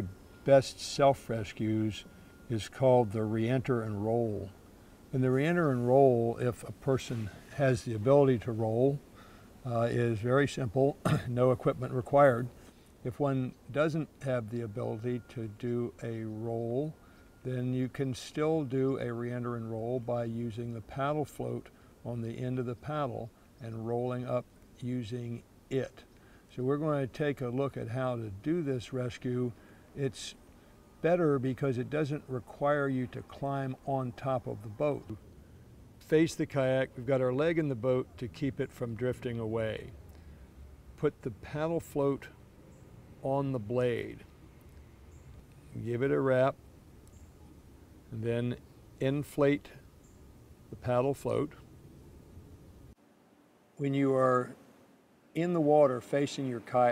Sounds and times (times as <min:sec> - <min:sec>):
Speech: 0:00.0 - 0:04.6, 0:05.2 - 0:09.0, 0:09.6 - 0:12.5, 0:13.1 - 0:30.4, 0:31.0 - 0:35.2, 0:36.0 - 0:40.0, 0:41.0 - 0:42.4, 0:43.2 - 0:44.3, 0:45.7 - 0:46.6, 0:48.1 - 0:49.8, 0:50.7 - 0:51.6, 0:53.8 - 0:54.6, 0:55.4 - 0:56.9.